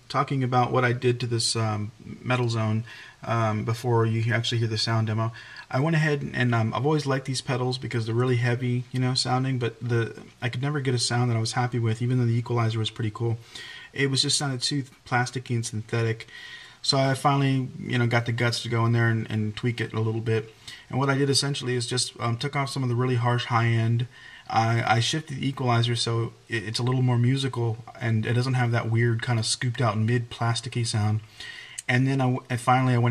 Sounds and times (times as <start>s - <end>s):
Speech: 0.0s - 33.1s.